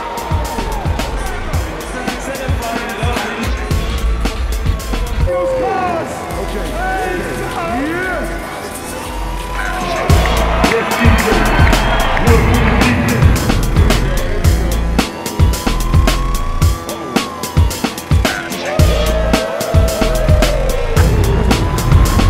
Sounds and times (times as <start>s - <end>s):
Music: 0.0s - 22.2s
Speech: 1.2s - 3.7s, 5.3s - 11.7s.